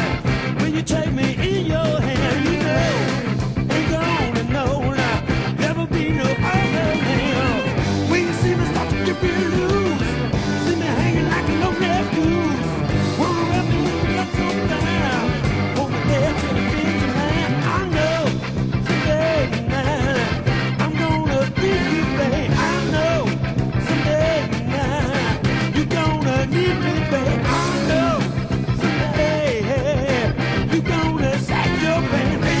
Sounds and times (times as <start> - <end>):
Music: 0.0 - 32.6.